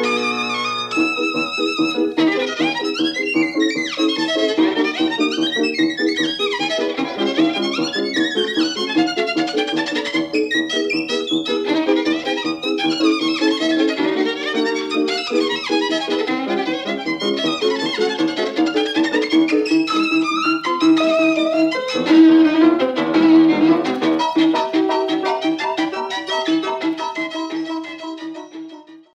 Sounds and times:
Violin, fiddle: 0:00.0 - 0:29.1.

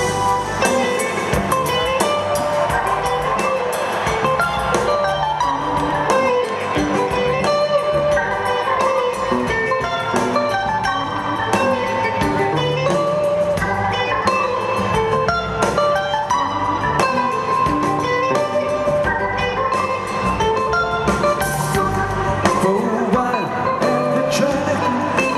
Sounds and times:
Music: 0:00.0 - 0:25.3.

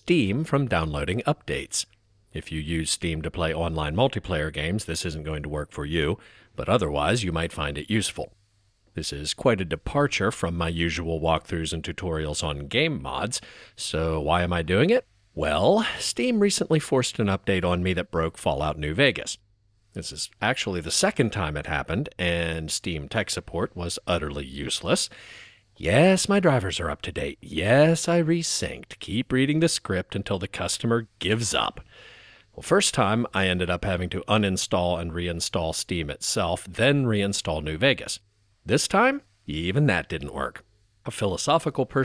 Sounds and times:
Speech: 0:00.0 - 0:08.4, 0:09.0 - 0:19.4, 0:20.0 - 0:25.1, 0:25.8 - 0:31.9, 0:32.6 - 0:42.0.

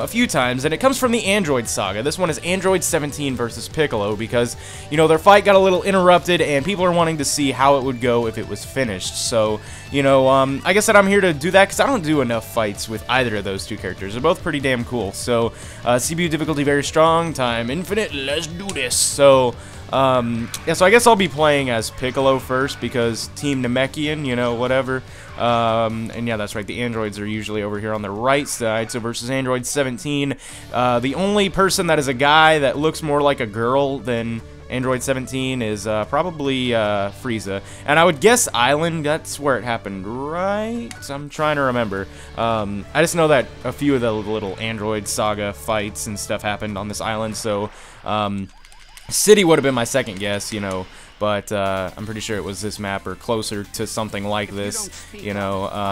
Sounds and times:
Speech: 0:00.0 - 0:48.5, 0:49.1 - 0:55.9.

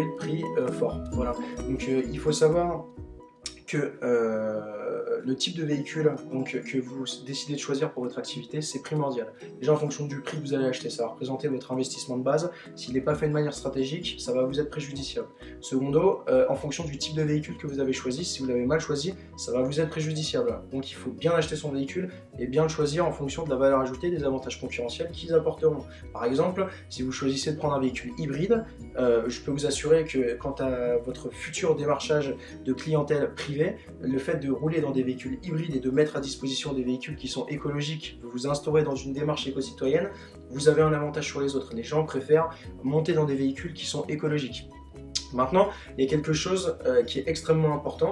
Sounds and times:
Speech: 0:00.0 - 0:02.9, 0:03.5 - 0:48.1
Music: 0:00.0 - 0:48.1.

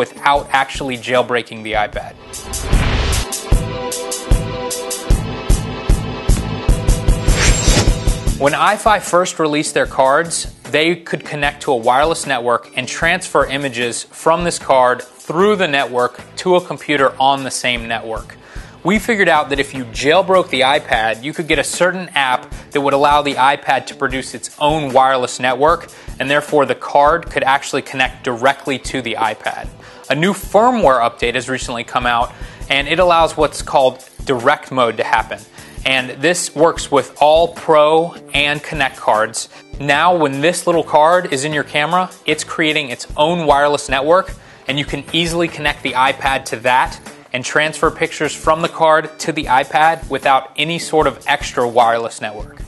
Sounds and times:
Speech: 0:00.0 - 0:02.2, 0:08.4 - 0:52.6
Music: 0:00.0 - 0:52.6.

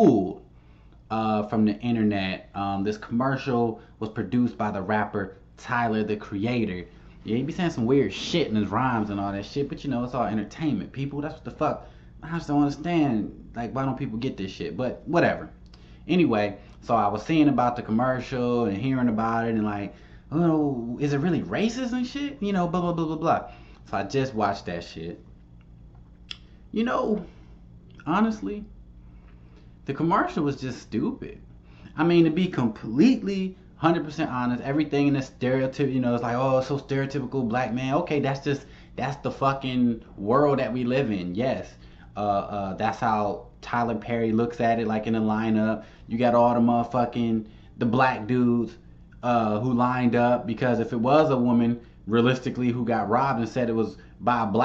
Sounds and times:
Speech: 0:00.0 - 0:00.4, 0:01.1 - 0:25.2, 0:26.7 - 0:27.3, 0:28.0 - 0:28.7, 0:29.9 - 0:54.6.

